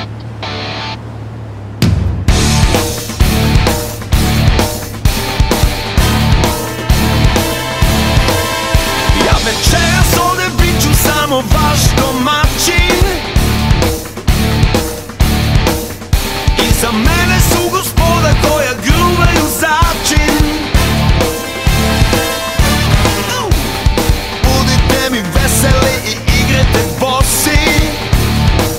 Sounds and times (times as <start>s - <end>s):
Music: 0.0s - 1.0s, 1.8s - 28.7s.